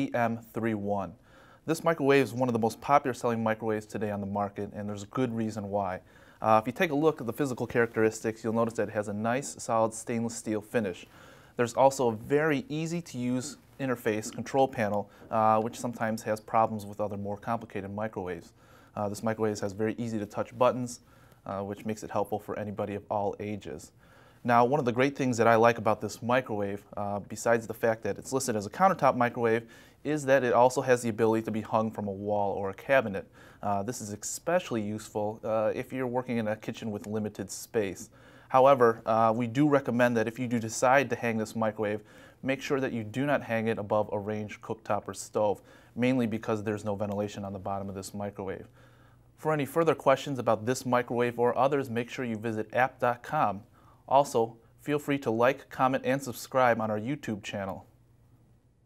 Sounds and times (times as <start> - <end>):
Speech: 0.0 - 48.8, 49.4 - 58.0.